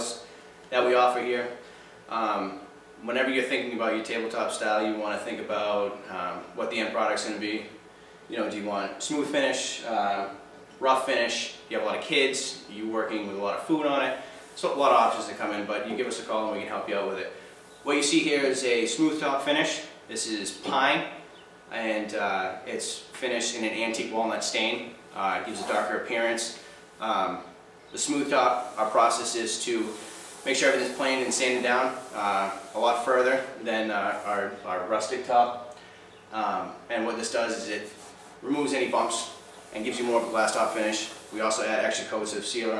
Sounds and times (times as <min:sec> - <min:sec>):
Speech: 0:00.0 - 0:35.7, 0:36.3 - 0:42.7.